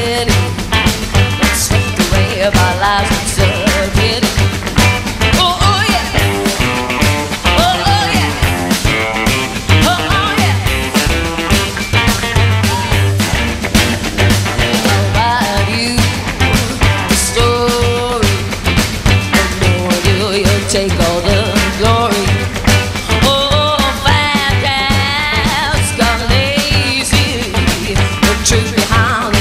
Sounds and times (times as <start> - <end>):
Music: 0.0 - 29.4.